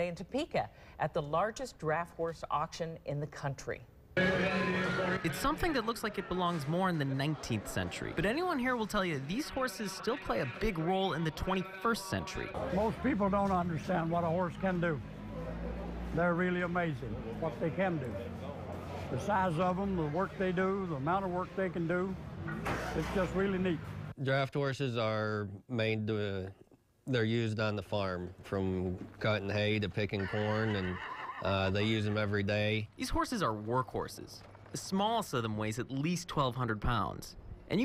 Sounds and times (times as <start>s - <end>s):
Speech: 0.0s - 22.2s.